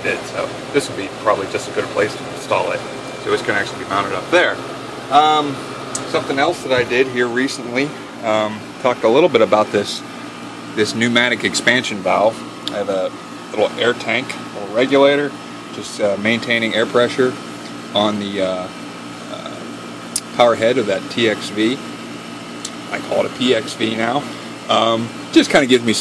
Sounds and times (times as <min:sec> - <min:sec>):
Speech: 0:00.0 - 0:10.1, 0:10.8 - 0:19.6, 0:20.2 - 0:21.8, 0:22.9 - 0:26.0.